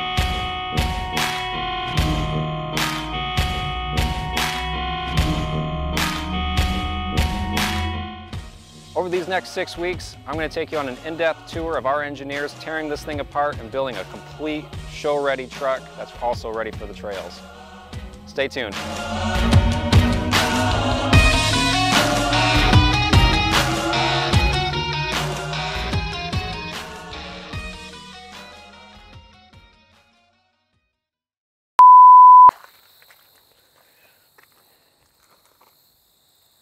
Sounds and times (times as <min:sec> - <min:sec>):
Music: 0:00.0 - 0:31.2
Speech: 0:09.0 - 0:17.4, 0:18.3 - 0:18.8.